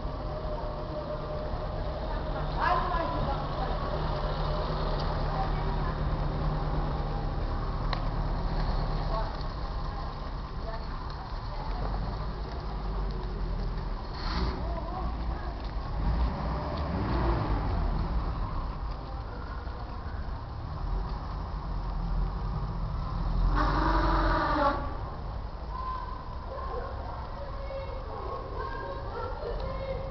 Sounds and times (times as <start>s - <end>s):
Speech: 1.9s - 4.2s, 5.2s - 6.4s, 9.0s - 12.4s, 14.6s - 15.7s, 25.7s - 30.1s.